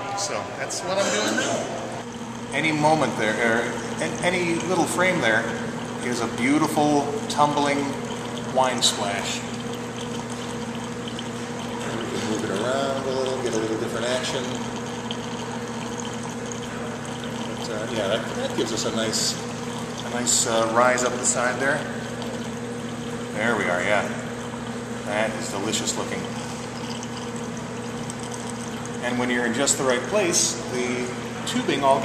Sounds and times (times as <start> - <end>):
Pour: 2.0 - 32.0.